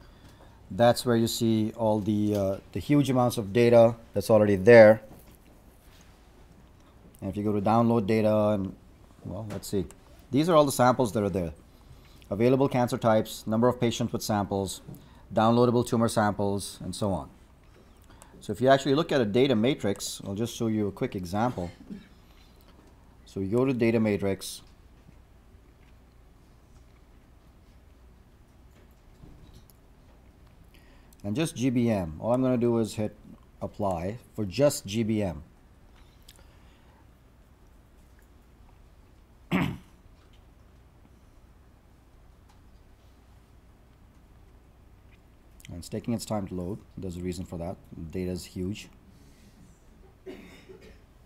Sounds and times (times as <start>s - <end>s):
Speech: 0.7s - 5.1s, 7.2s - 11.6s, 12.3s - 17.4s, 18.4s - 22.0s, 23.3s - 24.7s, 31.2s - 35.5s, 45.6s - 49.0s.